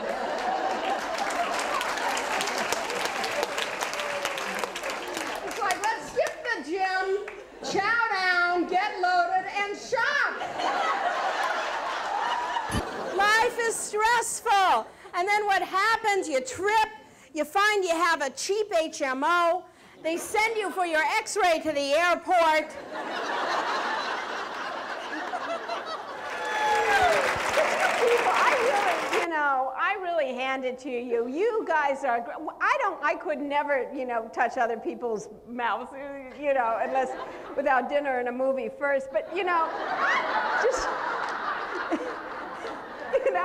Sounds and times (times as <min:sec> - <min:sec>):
Female speech, woman speaking: 0:05.5 - 0:10.4, 0:13.2 - 0:22.8, 0:28.0 - 0:39.7.